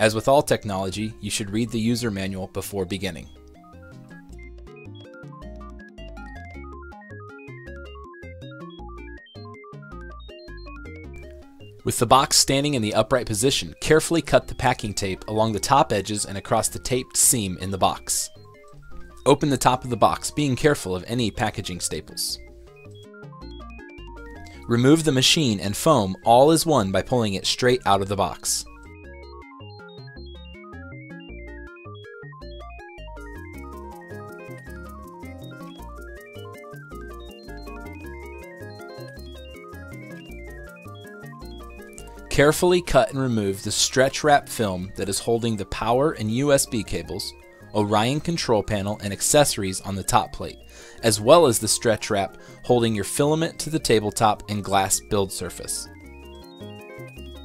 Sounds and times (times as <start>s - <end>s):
Speech: 0.0s - 3.3s, 11.9s - 18.3s, 19.3s - 22.4s, 24.7s - 28.7s, 42.3s - 55.9s
Music: 0.0s - 57.4s.